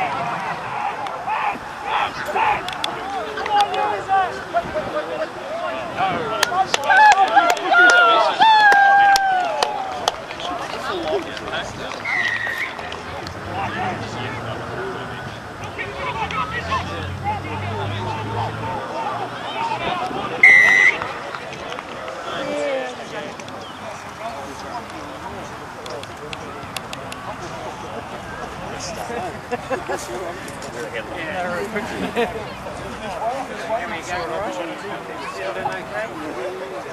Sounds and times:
Run: 0.0 - 13.4, 20.9 - 36.9
Speech: 0.0 - 36.9.

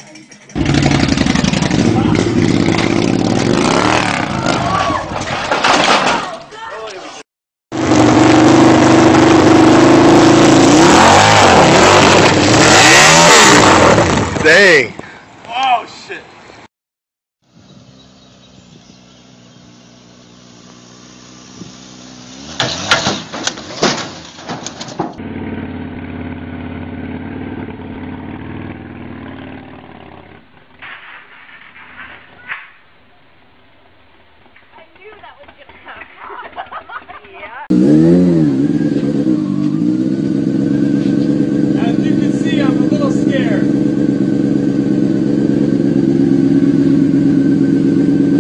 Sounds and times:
Motorcycle: 0.0 - 5.9, 7.7 - 15.3, 17.4 - 31.8, 34.2 - 48.4.

